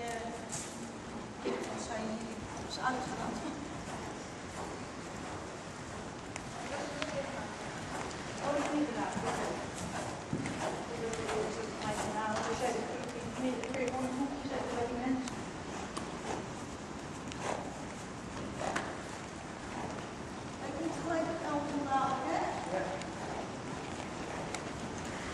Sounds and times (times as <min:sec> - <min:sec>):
Clip-clop: 0:00.0 - 0:25.3
Speech: 0:08.4 - 0:09.7, 0:10.9 - 0:15.3, 0:20.7 - 0:23.1.